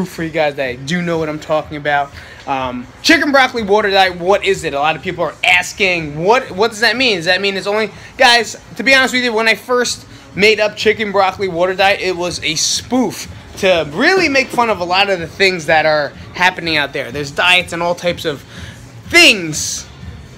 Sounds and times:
Speech: 0:00.0 - 0:18.4.

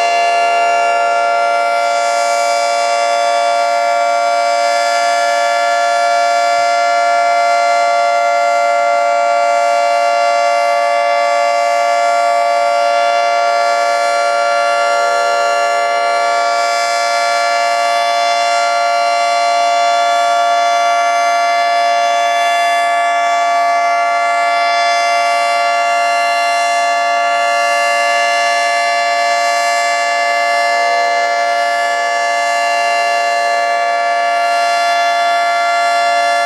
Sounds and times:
Civil defense siren: 0:00.0 - 0:36.4.

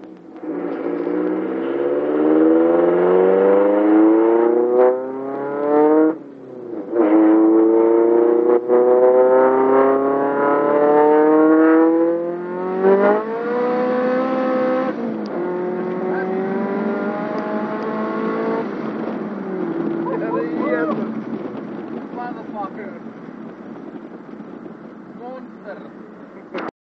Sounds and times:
Car: 0:00.0 - 0:26.7
Speech: 0:20.0 - 0:21.0, 0:25.2 - 0:25.9.

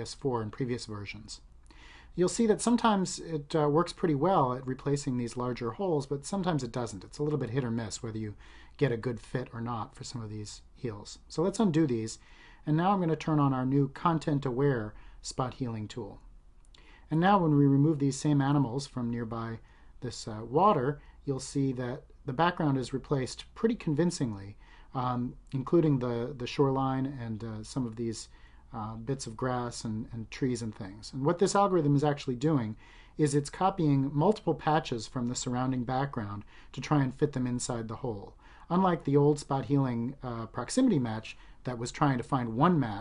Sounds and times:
Speech: 0:00.0 - 0:01.5, 0:02.1 - 0:16.3, 0:17.1 - 0:43.0.

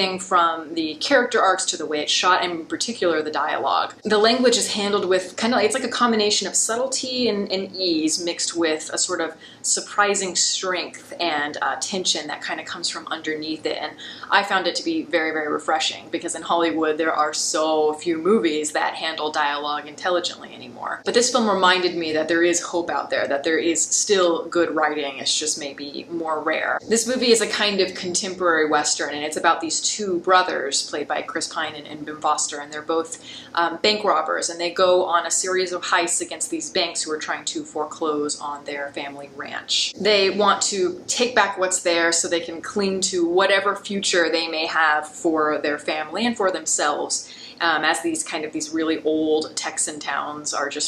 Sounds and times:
Speech: 0:00.0 - 0:50.8.

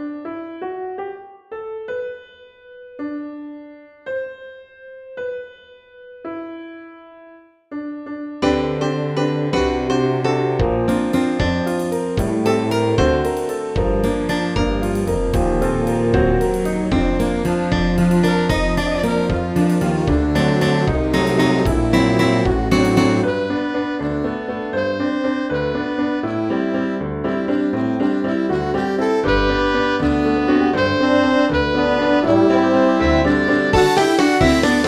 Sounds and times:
Soundtrack music: 0:08.5 - 0:23.7, 0:30.7 - 0:34.8.

